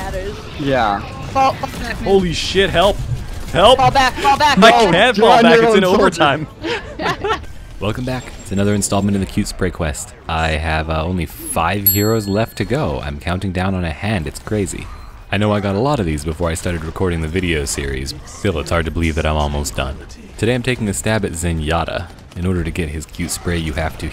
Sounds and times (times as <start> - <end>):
Speech: 0.0 - 3.0, 3.6 - 6.5, 7.8 - 24.1.